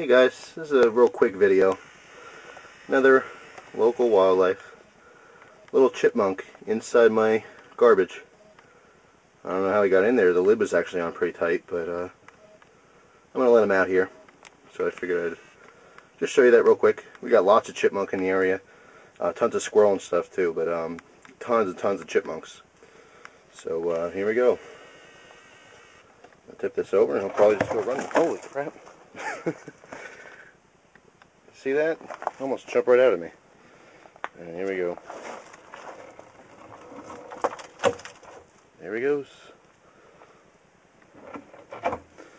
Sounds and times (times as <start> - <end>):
Speech: 0.0 - 1.8, 2.9 - 4.8, 5.7 - 8.3, 9.4 - 12.2, 13.4 - 15.5, 16.2 - 18.6, 19.2 - 22.7, 23.5 - 24.6, 26.5 - 28.8, 31.5 - 33.4, 34.4 - 35.0, 38.8 - 39.6.